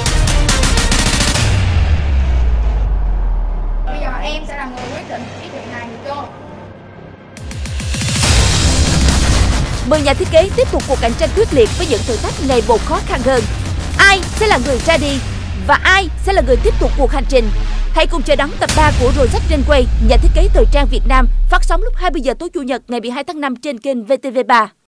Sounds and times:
Music: 0.0 - 22.8
Speech: 9.9 - 24.8.

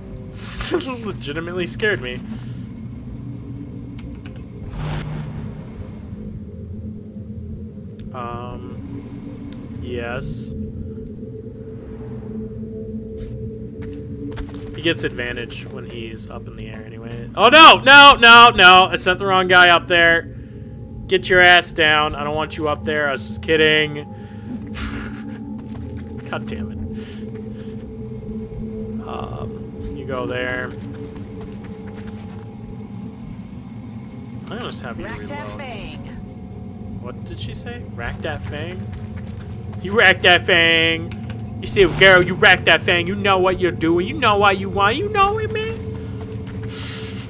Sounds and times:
Speech: 8.2 - 8.8, 9.9 - 10.5, 14.8 - 20.2, 34.5 - 36.2, 41.7 - 45.8.

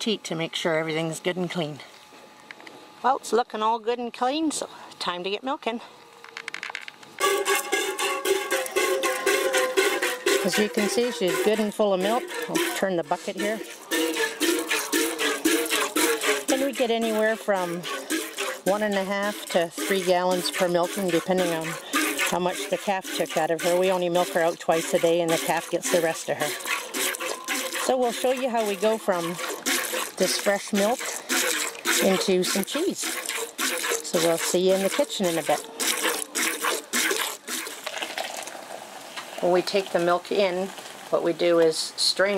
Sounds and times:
Speech: 3.0 - 5.9, 10.5 - 13.6, 18.7 - 26.5, 27.9 - 29.4, 30.2 - 31.1, 32.0 - 33.1, 34.1 - 35.6, 39.4 - 42.3.

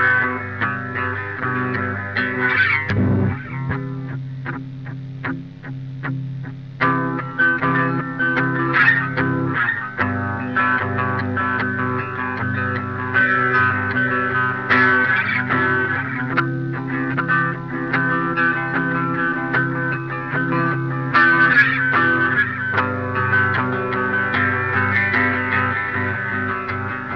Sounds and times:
Guitar: 0.0 - 27.1.

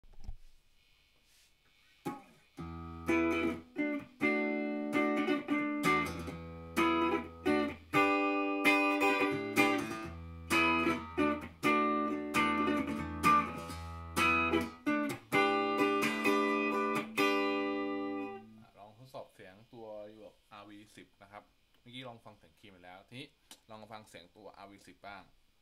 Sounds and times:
Electronic tuner: 1.7 - 18.8
Guitar: 1.9 - 19.2.

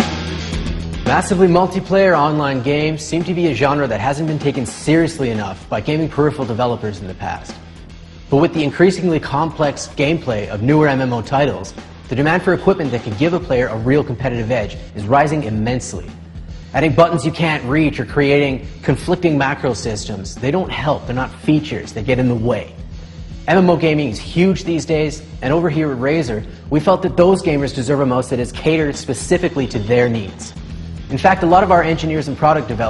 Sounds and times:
Music: 0.0 - 32.9
Speech: 1.1 - 7.6, 8.3 - 16.2, 16.8 - 22.8, 23.5 - 32.9.

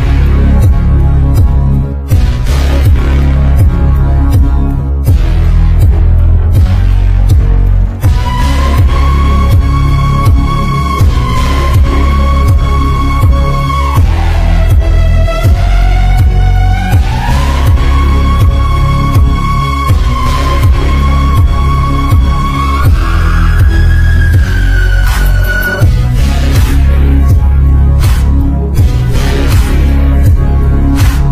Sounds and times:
Music: 0.0 - 31.3.

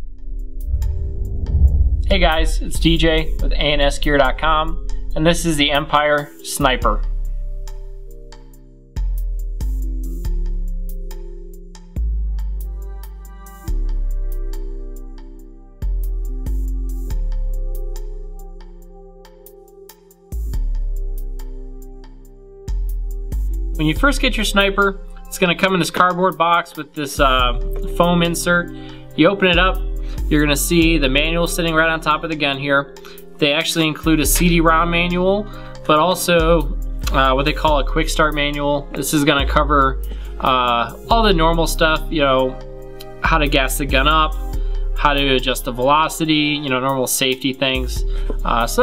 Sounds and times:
Music: 0.0 - 48.8
Speech: 2.1 - 7.1, 23.8 - 44.4, 45.0 - 48.8.

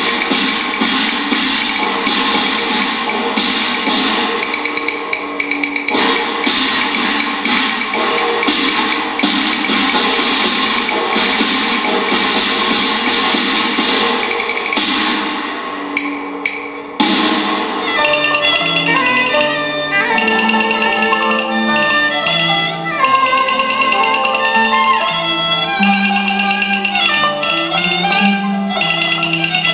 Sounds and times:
Music: 0.0 - 29.7.

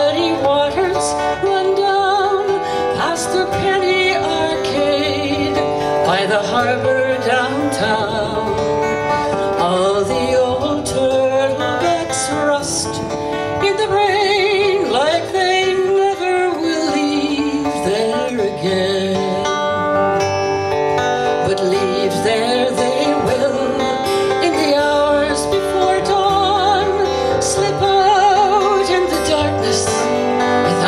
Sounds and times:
Female singing: 0.0 - 8.6, 9.6 - 19.5, 21.4 - 30.8
Music: 0.0 - 30.8.

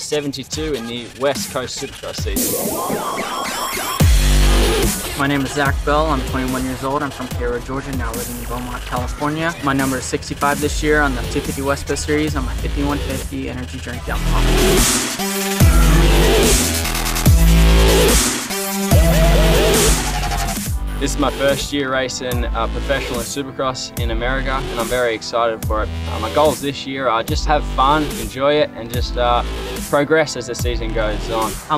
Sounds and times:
Speech: 0.0 - 2.4, 5.2 - 14.8, 21.0 - 31.7
Music: 0.0 - 31.7.

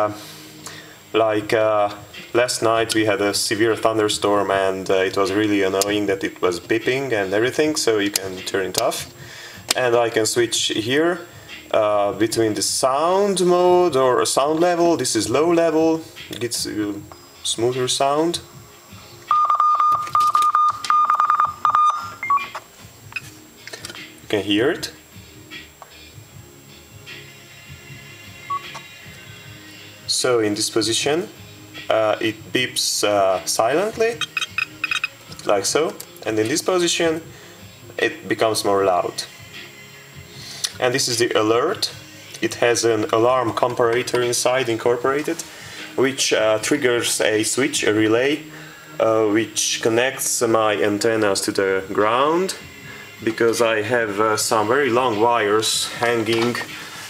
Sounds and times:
Music: 0.0 - 57.1
Speech: 1.2 - 9.1, 9.7 - 18.5, 24.3 - 25.0, 30.1 - 34.2, 35.4 - 37.3, 38.0 - 39.3, 40.8 - 45.4, 46.0 - 48.4, 49.0 - 52.6, 53.2 - 56.7
Beep, bleep: 19.3 - 22.6
Buzzer: 19.3 - 22.6, 34.2 - 35.2.

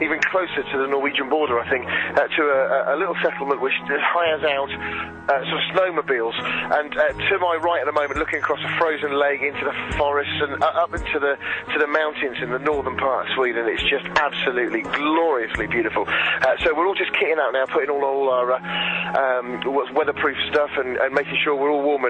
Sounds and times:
Music: 0.0 - 22.0
Speech: 0.0 - 22.0.

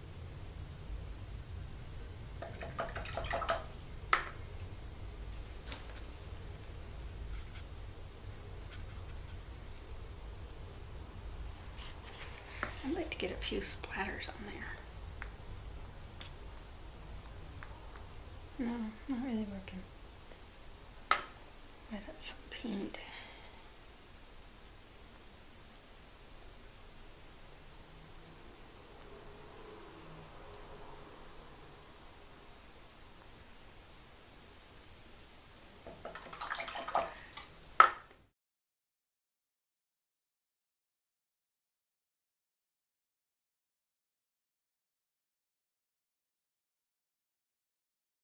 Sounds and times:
Silence: 0.0 - 36.0
Inside, small room: 0.0 - 38.4.

